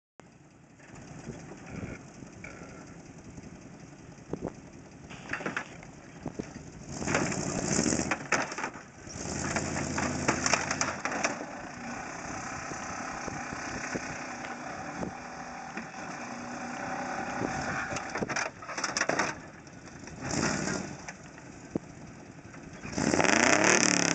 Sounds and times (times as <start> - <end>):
Car: 0.2 - 24.1
Outside, rural or natural: 0.2 - 24.1.